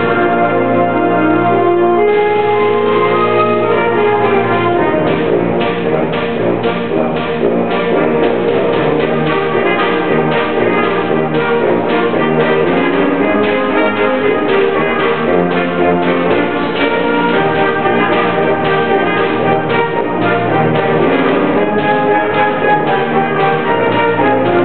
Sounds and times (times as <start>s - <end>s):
Jingle (music): 0.0s - 24.6s.